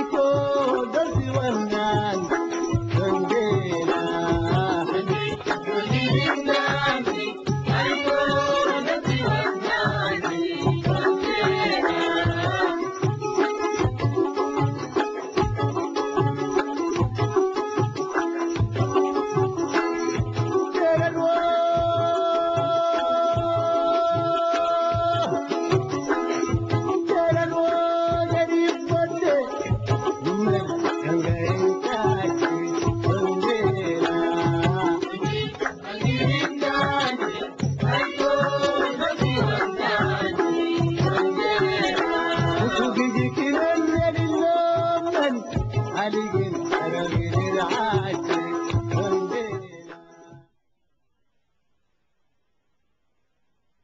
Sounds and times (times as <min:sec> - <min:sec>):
Music: 0:00.0 - 0:51.3.